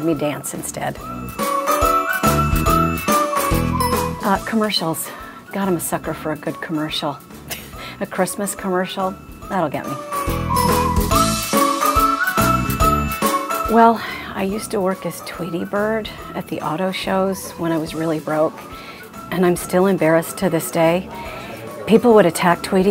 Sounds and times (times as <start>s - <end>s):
Speech: 0.0s - 1.0s, 4.2s - 7.2s, 19.3s - 22.9s
Music: 0.0s - 22.9s.